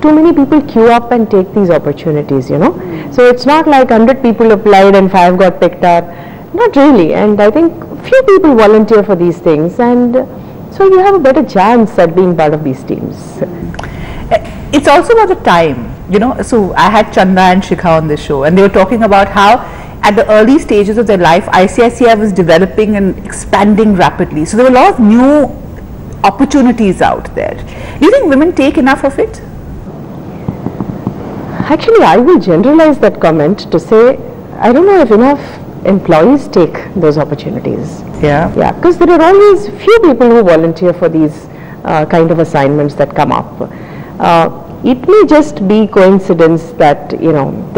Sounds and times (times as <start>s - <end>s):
Female speech, woman speaking: 0.0s - 13.5s, 14.3s - 25.6s, 26.2s - 29.4s, 31.6s - 47.7s.